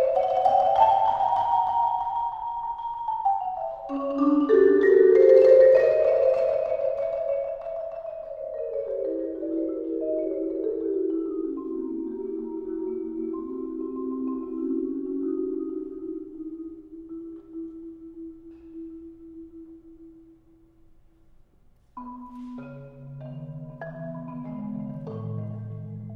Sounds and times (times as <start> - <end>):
Marimba, xylophone: 0.0 - 20.6, 21.9 - 26.1
Classical music: 0.0 - 26.1.